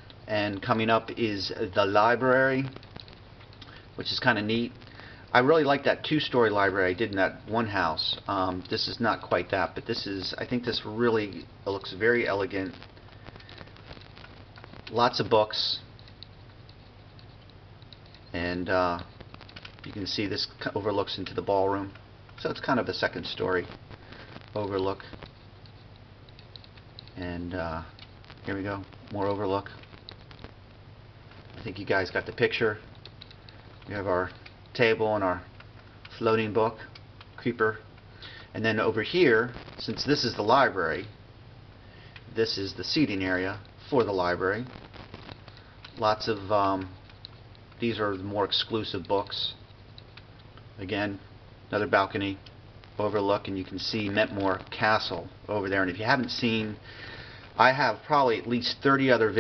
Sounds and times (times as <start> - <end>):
Speech: 0.3 - 2.8, 4.0 - 12.8, 14.9 - 15.9, 18.3 - 19.1, 19.9 - 23.7, 24.6 - 25.1, 27.2 - 29.8, 31.6 - 32.8, 33.9 - 35.5, 36.1 - 37.9, 38.6 - 41.1, 42.3 - 44.7, 46.0 - 47.0, 47.8 - 49.6, 50.8 - 52.4, 53.0 - 56.8, 57.6 - 59.4.